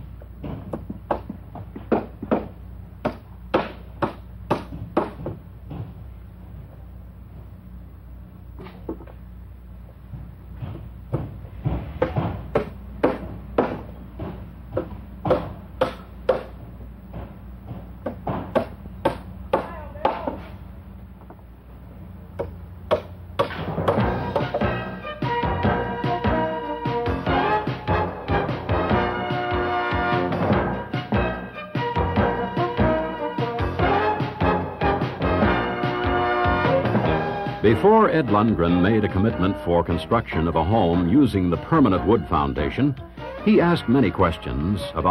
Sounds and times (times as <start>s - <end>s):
Music: 23.9s - 45.1s.